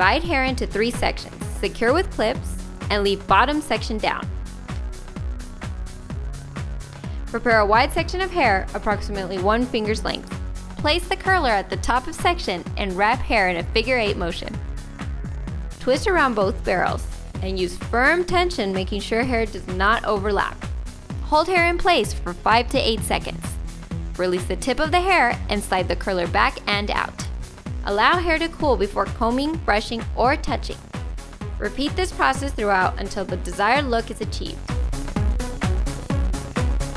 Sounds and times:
Speech: 0.0s - 4.3s, 7.3s - 14.6s, 15.8s - 20.6s, 21.2s - 23.6s, 24.2s - 27.3s, 27.9s - 30.8s, 31.6s - 34.6s
Music: 0.0s - 36.9s.

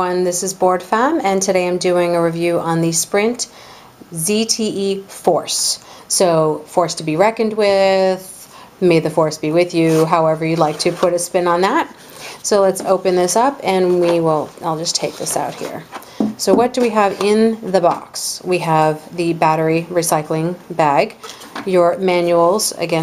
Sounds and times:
Speech: 0.0s - 3.5s, 4.1s - 23.0s.

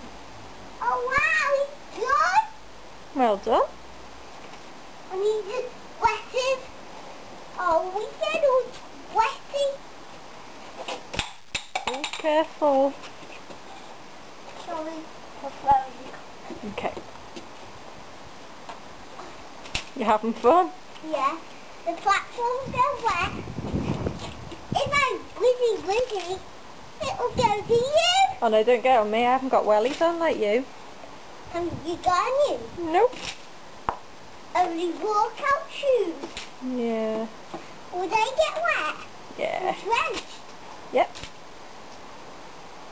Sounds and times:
Speech: 3.2s - 3.7s, 20.0s - 23.3s, 27.0s - 30.7s, 31.6s - 33.2s, 34.6s - 37.3s, 38.0s - 40.2s, 40.9s - 41.2s.

